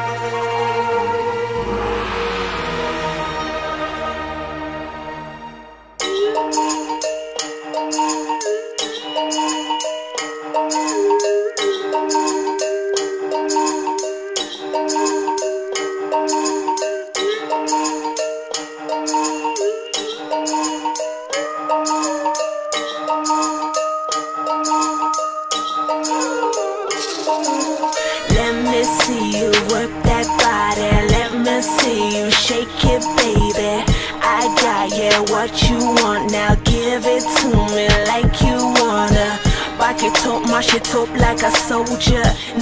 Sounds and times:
Music: 0.0 - 42.6.

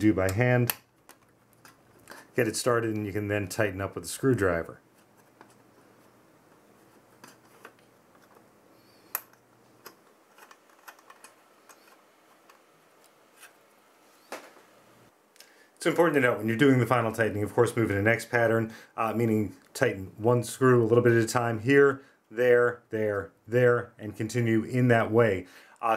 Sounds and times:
Speech: 0.0 - 0.8, 2.4 - 4.8, 15.8 - 25.9.

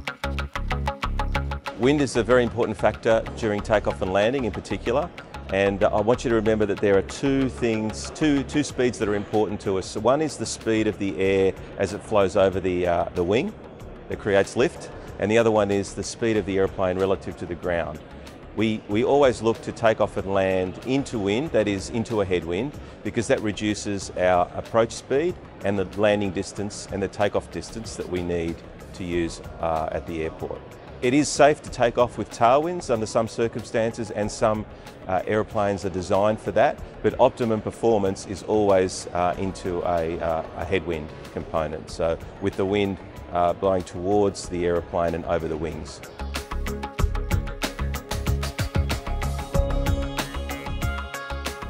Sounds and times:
Music: 0.0 - 51.6
Speech: 1.8 - 18.0, 18.6 - 46.0.

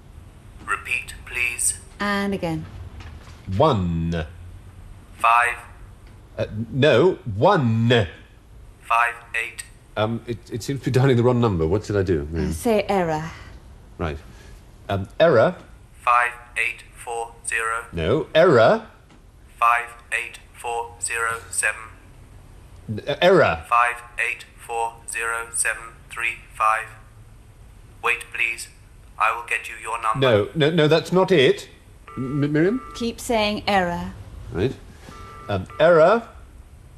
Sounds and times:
Female speech, woman speaking: 2.0 - 2.7, 12.4 - 13.5, 33.0 - 34.2.

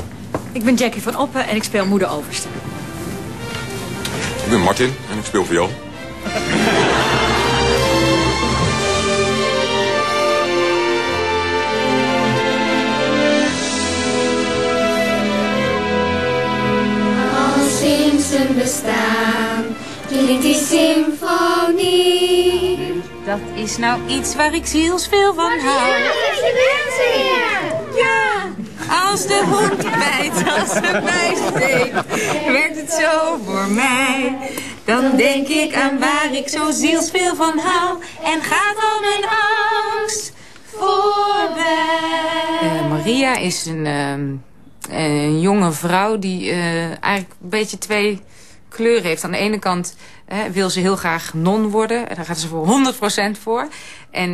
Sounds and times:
Music: 2.0 - 28.0.

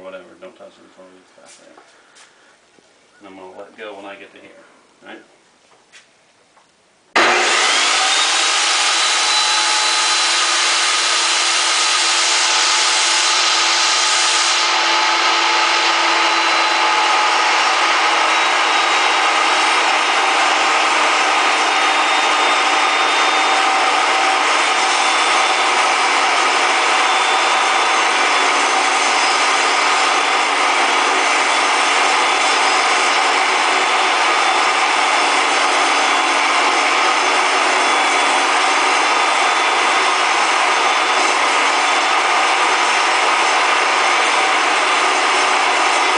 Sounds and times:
Sawing: 7.2 - 46.1.

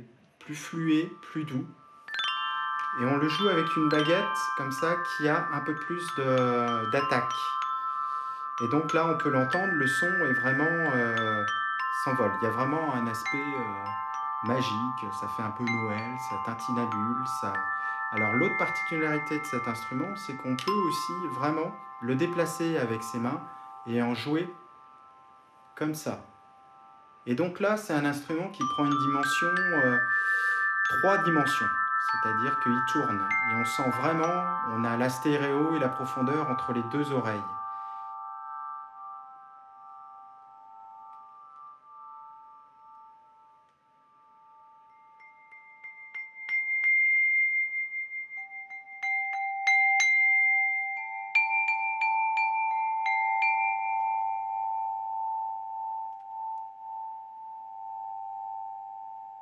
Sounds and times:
Glockenspiel: 0.0 - 59.4
Marimba, xylophone: 0.0 - 59.4.

